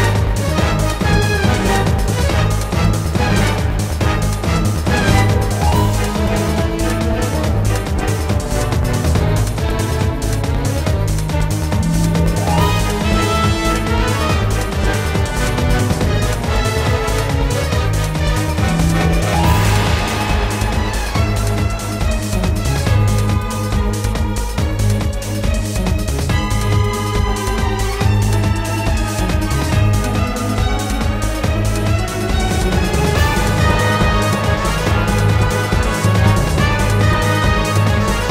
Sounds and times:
Music: 0.0 - 38.3.

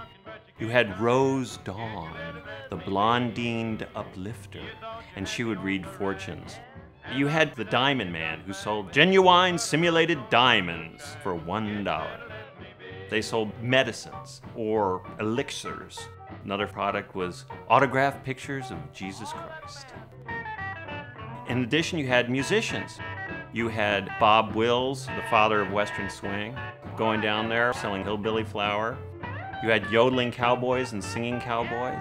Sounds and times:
Music: 0.0 - 32.0
Speech: 0.6 - 12.2, 13.1 - 20.0, 21.5 - 23.0, 23.6 - 29.0, 29.6 - 32.0.

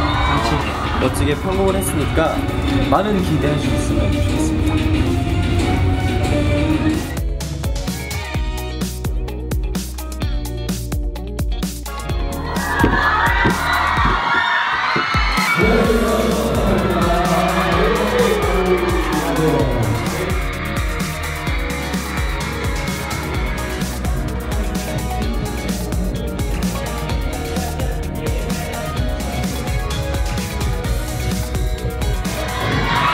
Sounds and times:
Music: 0.0 - 33.1
Speech: 0.3 - 4.6, 15.6 - 20.3.

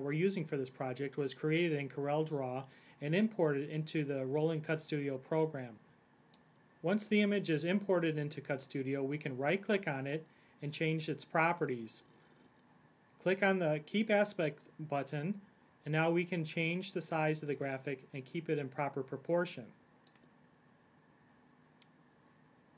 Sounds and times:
Speech: 0.0 - 5.8, 6.8 - 12.1, 13.2 - 19.8.

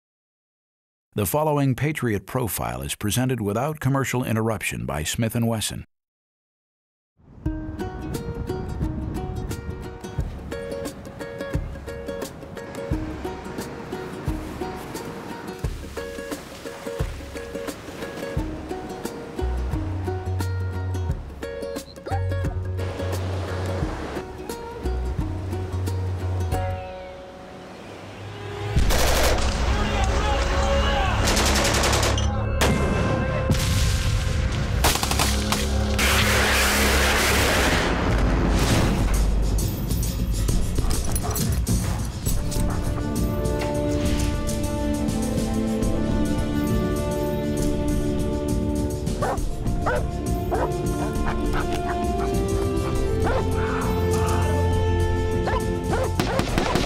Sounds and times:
Speech: 1.2 - 5.9, 29.7 - 31.2
Music: 7.2 - 56.8.

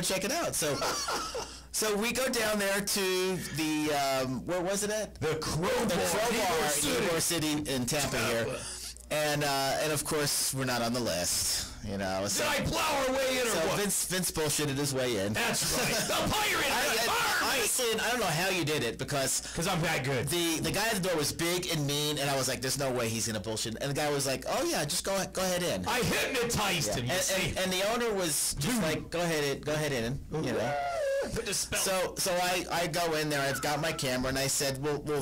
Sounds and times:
Speech: 1.8 - 35.2.

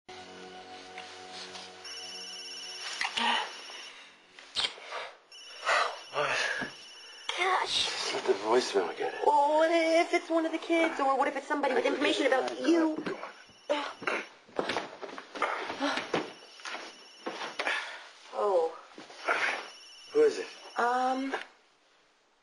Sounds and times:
Music: 0.1 - 4.4.

